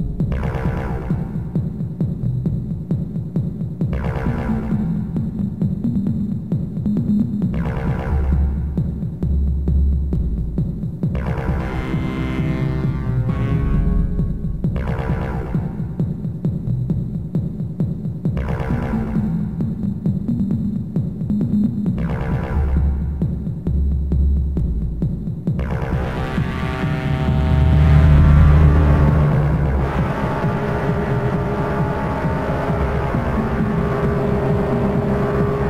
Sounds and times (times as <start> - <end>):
Techno: 0.0 - 35.7.